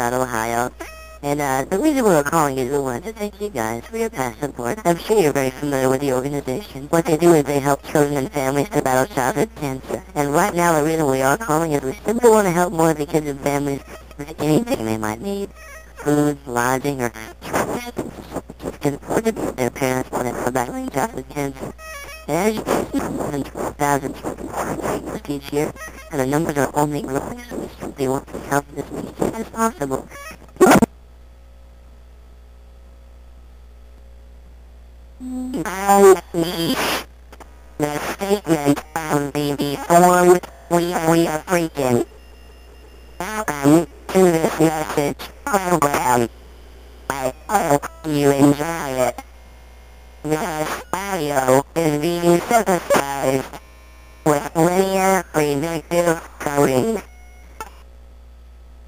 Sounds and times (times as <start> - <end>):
Speech synthesizer: 0.0 - 30.9, 35.5 - 37.1, 37.8 - 42.1, 43.2 - 46.3, 47.1 - 49.2, 50.3 - 53.6, 54.3 - 57.1.